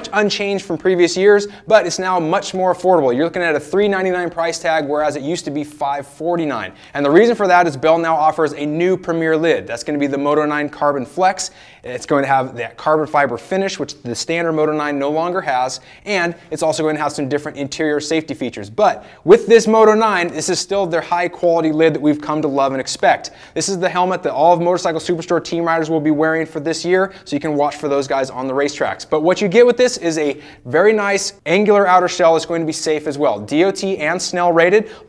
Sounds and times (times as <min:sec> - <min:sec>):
Speech: 0:00.0 - 0:35.0.